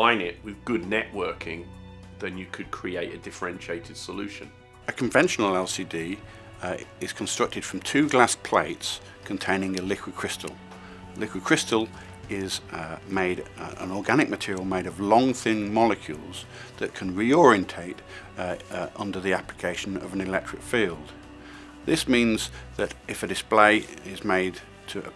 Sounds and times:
Speech: 0.0 - 10.6, 11.2 - 21.2, 21.9 - 25.1
Music: 0.0 - 25.1.

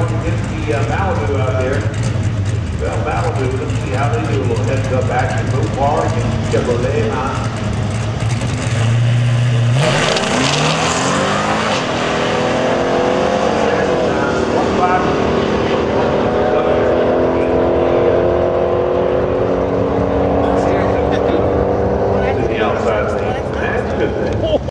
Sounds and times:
Speech: 0.0 - 1.9, 2.8 - 7.5, 13.6 - 18.3, 20.2 - 24.7.

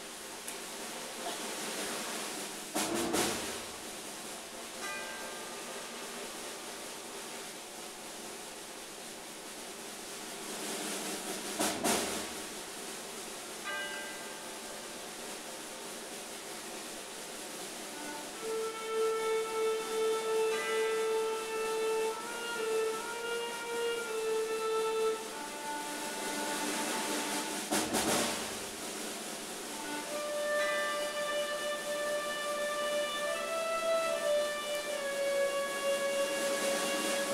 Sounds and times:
Music: 0.0 - 37.3.

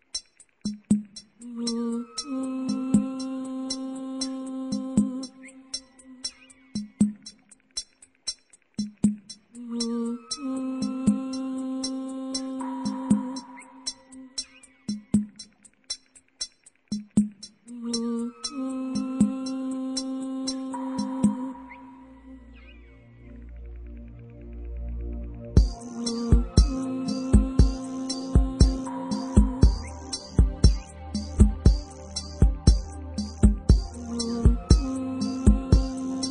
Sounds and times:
Music: 0.0 - 36.3.

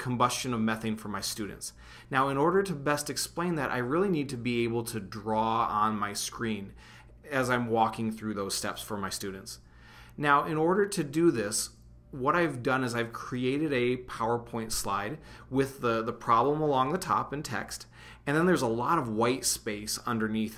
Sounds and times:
Speech: 0.0 - 9.6, 10.2 - 20.5.

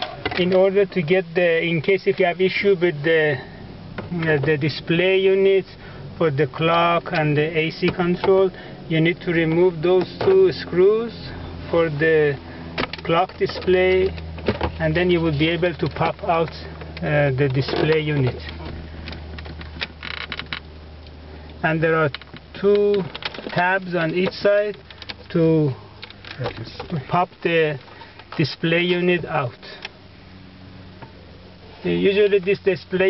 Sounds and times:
Vehicle: 0.0 - 33.1
Speech: 0.3 - 3.5, 4.1 - 12.4, 13.1 - 14.2, 14.8 - 18.6, 21.6 - 25.8, 26.4 - 27.8, 28.4 - 29.8, 31.8 - 33.1.

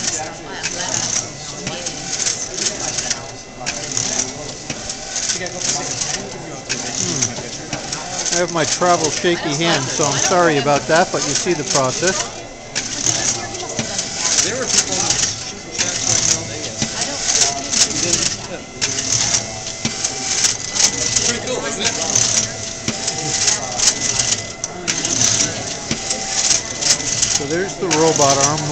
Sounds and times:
Speech: 0.0 - 28.7.

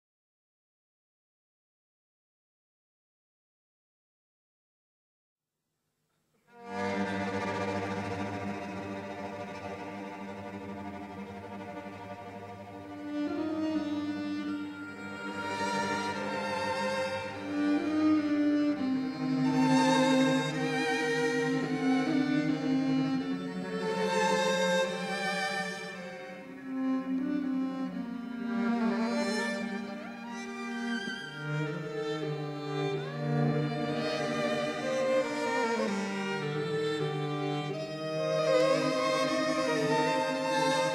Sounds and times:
Music: 6.1 - 40.9.

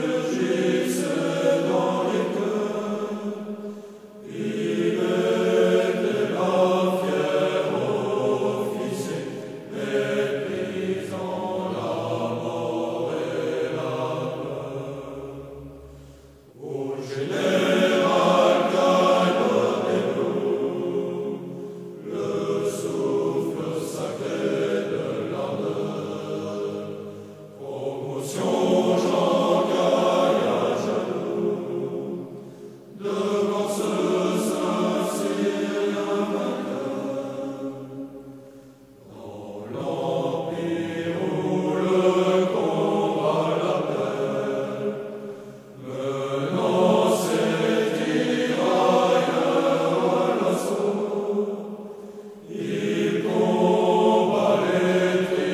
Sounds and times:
Mantra: 0.0 - 15.9, 16.6 - 38.2, 39.0 - 51.8, 52.4 - 55.5.

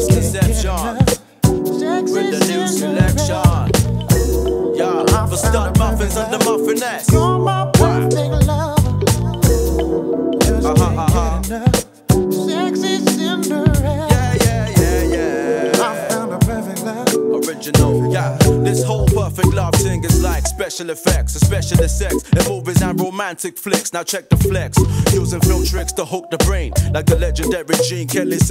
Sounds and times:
Music: 0.0 - 28.5.

